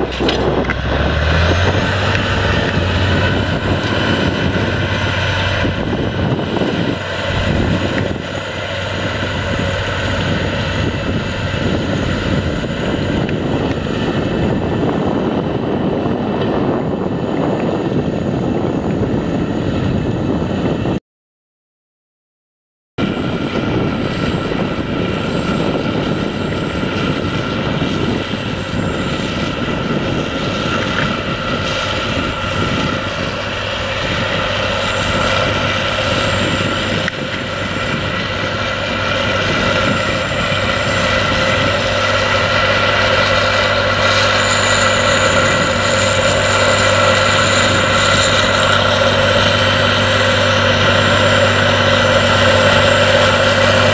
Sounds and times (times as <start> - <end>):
Outside, rural or natural: 0.0 - 21.0, 23.0 - 53.9
Vehicle: 0.0 - 21.0, 23.0 - 53.9.